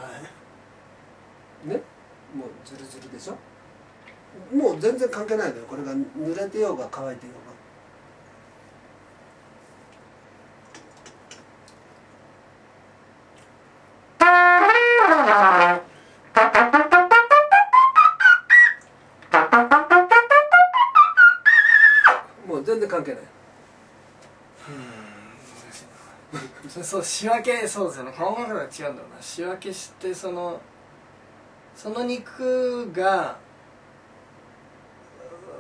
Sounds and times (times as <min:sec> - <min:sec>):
Trumpet: 0:14.2 - 0:22.3.